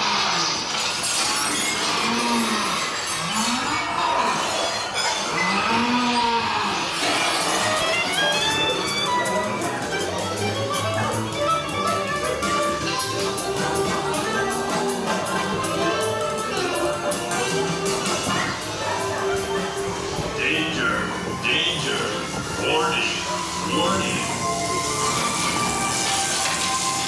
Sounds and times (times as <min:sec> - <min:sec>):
Music: 0:00.2 - 0:27.0.